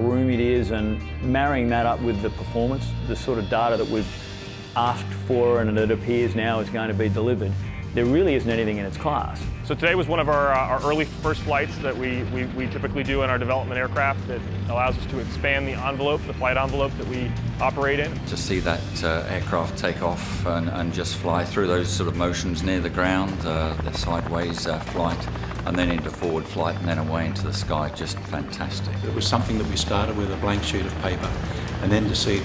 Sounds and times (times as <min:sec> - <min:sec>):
Speech: 0:00.0 - 0:04.1, 0:04.8 - 0:32.4
Music: 0:00.0 - 0:32.4.